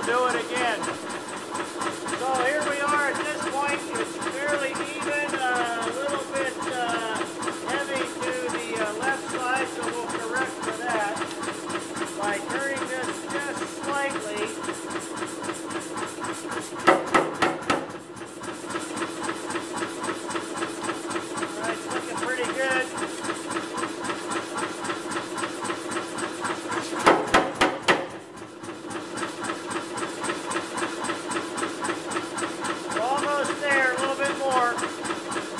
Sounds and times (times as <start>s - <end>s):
Hammer: 16.8s - 17.8s, 27.0s - 28.1s.